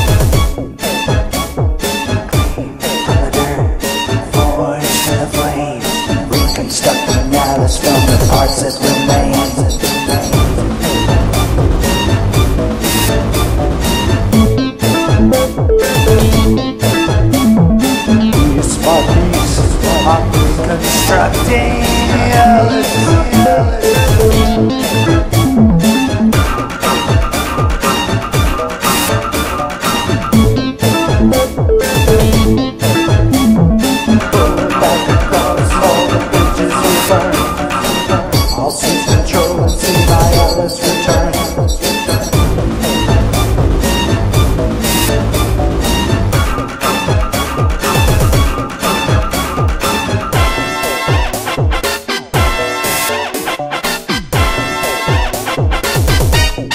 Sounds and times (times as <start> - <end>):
Music: 0.0 - 56.7.